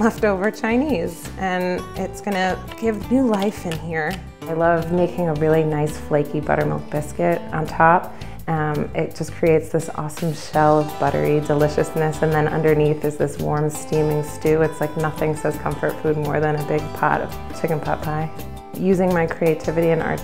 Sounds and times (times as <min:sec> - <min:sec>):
Music: 0:00.0 - 0:20.2
Speech: 0:00.0 - 0:20.2.